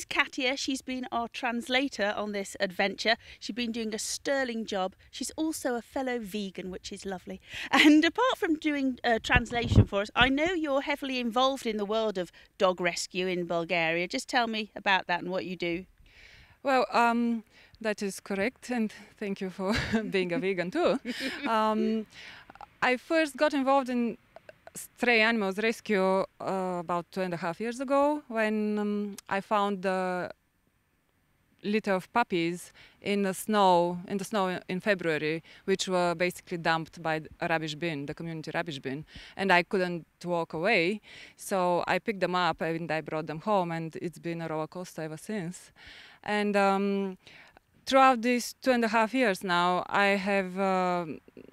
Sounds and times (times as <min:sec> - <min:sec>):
Speech: 0:00.0 - 0:15.9, 0:16.7 - 0:30.4, 0:31.7 - 0:45.7, 0:46.3 - 0:47.2, 0:47.9 - 0:51.2.